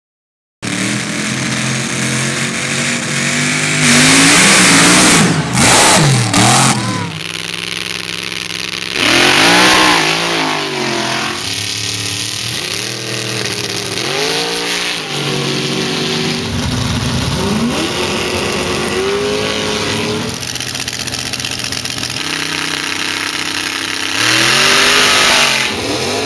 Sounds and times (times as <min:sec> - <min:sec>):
Truck: 0:00.6 - 0:26.2.